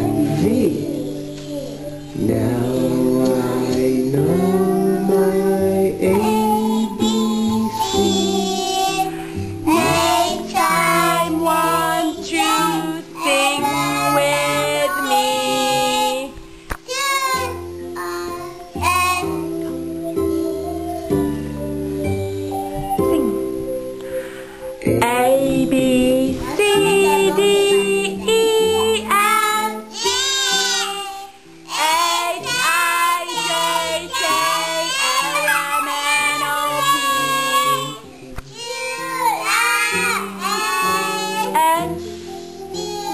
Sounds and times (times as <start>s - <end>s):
Child singing: 0.0s - 21.2s, 25.0s - 43.1s
Music: 0.0s - 43.1s.